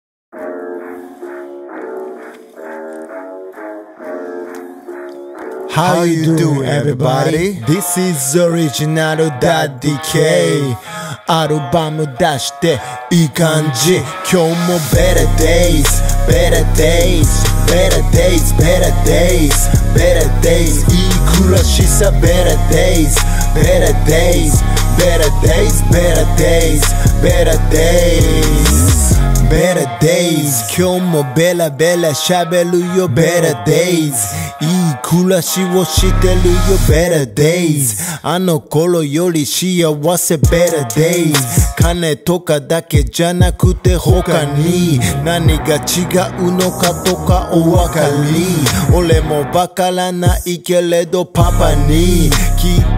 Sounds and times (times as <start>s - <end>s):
Music: 0.3s - 37.2s, 40.2s - 42.2s, 42.8s - 52.9s.